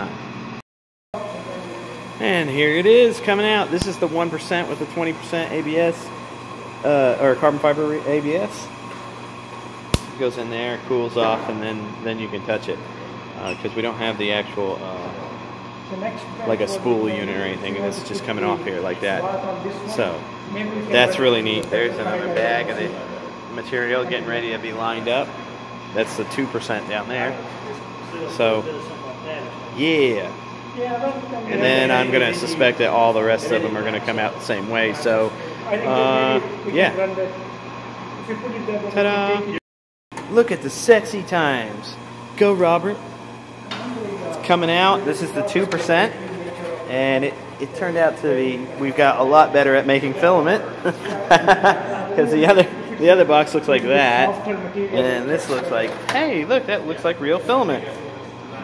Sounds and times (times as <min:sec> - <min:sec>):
Speech: 0:01.2 - 0:06.1, 0:06.8 - 0:08.7, 0:10.2 - 0:15.3, 0:15.9 - 0:37.5, 0:38.2 - 0:39.6, 0:40.3 - 0:43.1, 0:43.8 - 0:58.6.